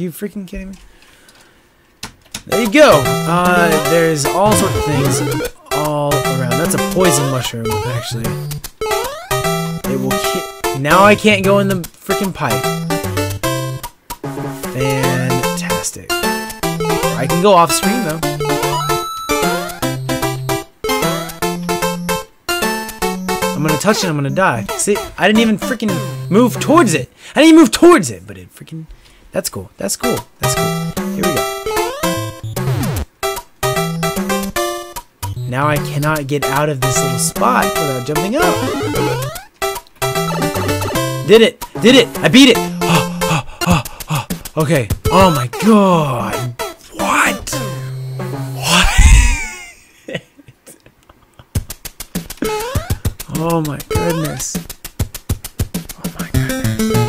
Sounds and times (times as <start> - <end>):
Speech: 0.0 - 0.8, 2.5 - 8.4, 9.8 - 12.6, 14.8 - 16.2, 17.2 - 18.2, 23.6 - 31.4, 35.5 - 39.2, 40.4 - 43.2, 44.6 - 47.7, 53.3 - 54.6, 56.0 - 56.6.